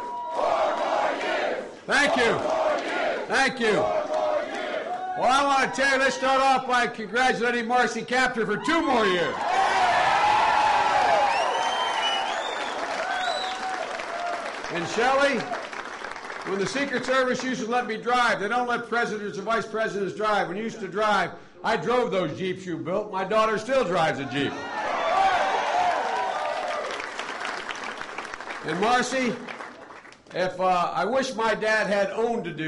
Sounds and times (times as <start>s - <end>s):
Male speech, man speaking: 1.9s - 2.4s, 3.3s - 3.9s, 5.2s - 9.4s, 14.8s - 15.5s, 16.5s - 24.6s, 28.7s - 29.4s, 30.4s - 32.6s
Narration, monologue: 3.3s - 4.0s, 5.2s - 9.4s, 14.6s - 24.6s, 28.4s - 32.6s.